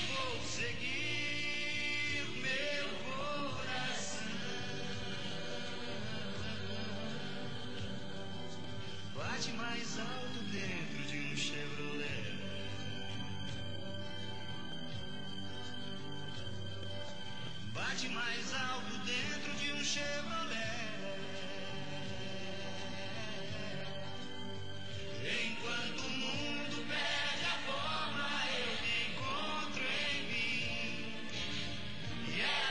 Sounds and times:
Music: 0.0 - 32.7.

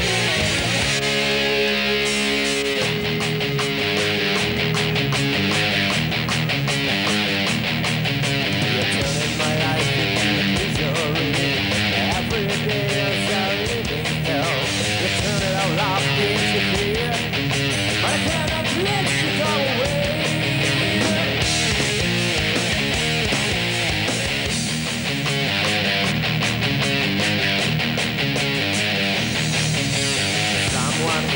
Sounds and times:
Heavy metal: 0.0 - 31.3.

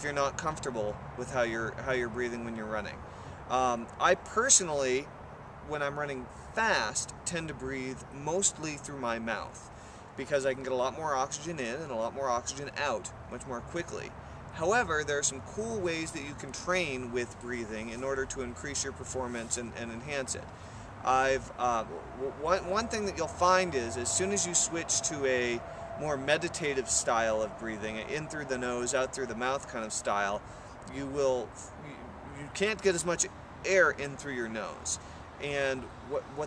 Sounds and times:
Speech: 0.0 - 5.1, 5.7 - 9.6, 10.2 - 36.4.

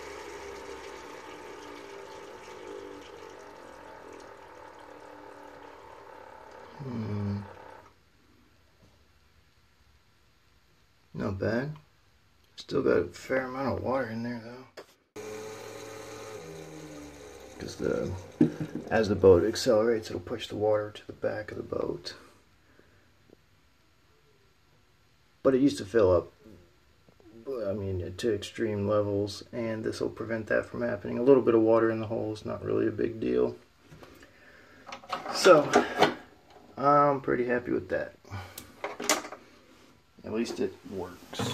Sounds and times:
Speech: 11.2 - 11.9, 12.6 - 14.8, 17.6 - 18.2, 18.9 - 22.3, 25.4 - 26.4, 27.3 - 33.6, 35.3 - 35.9, 36.8 - 38.2, 40.2 - 41.5.

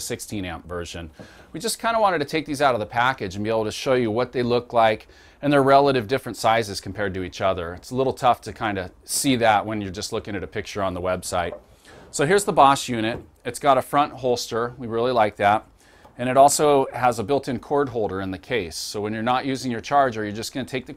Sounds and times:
Speech: 0.0 - 20.9.

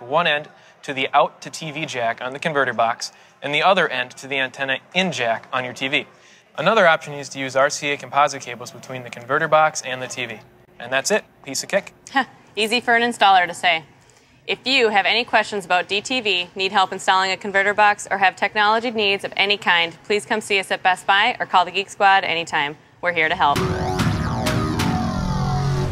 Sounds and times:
Music: 23.6 - 25.9.

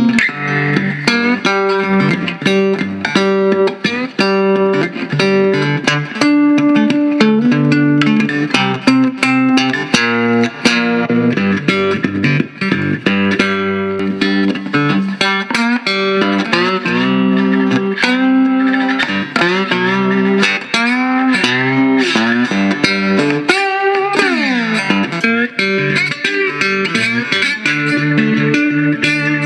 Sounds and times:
Electric guitar: 0.0 - 29.4.

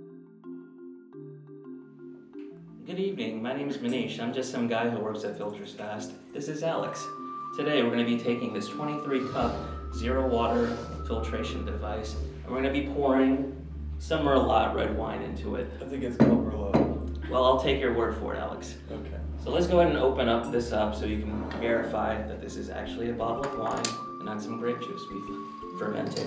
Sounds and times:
Music: 0.0 - 26.2
Speech: 2.8 - 26.2.

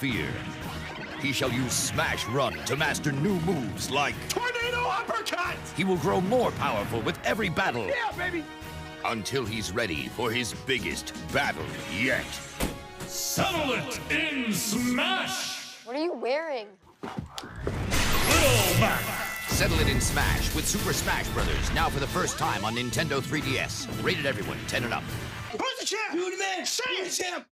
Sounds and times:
Music: 0.0 - 15.7, 17.7 - 26.1
Smash, crash: 17.8 - 22.1.

